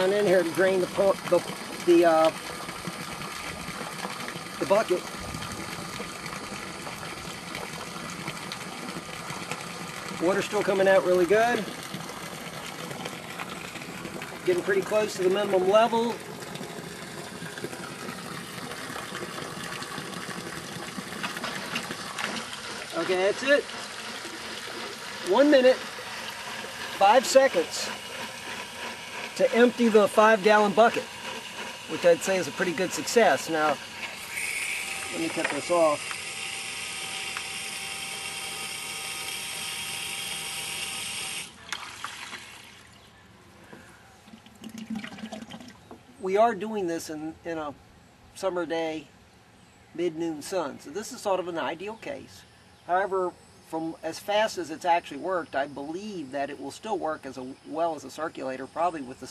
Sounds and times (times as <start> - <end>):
Water tap, faucet: 0.0 - 15.7, 16.4 - 27.6
Water: 0.0 - 47.9.